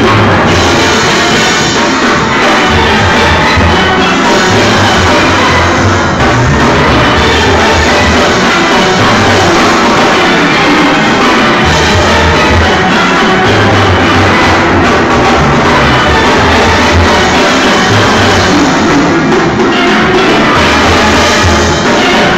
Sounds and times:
Steelpan: 0.0s - 22.3s.

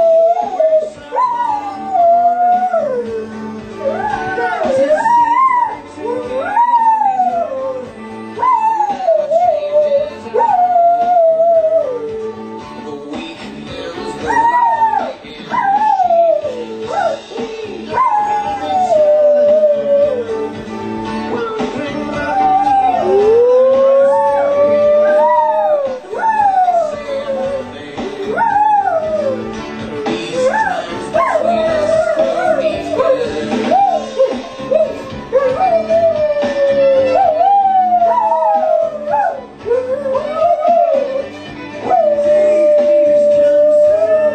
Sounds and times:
Howl: 0.0s - 12.3s, 14.2s - 17.2s, 17.9s - 20.4s, 22.1s - 29.6s, 30.3s - 44.3s
Music: 0.0s - 44.3s.

